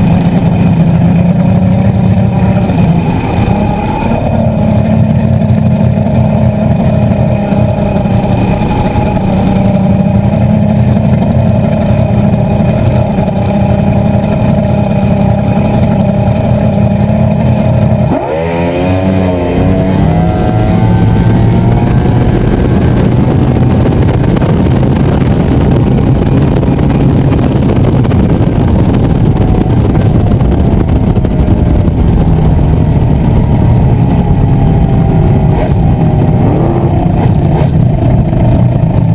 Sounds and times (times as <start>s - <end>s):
Motorboat, speedboat: 0.0s - 39.1s.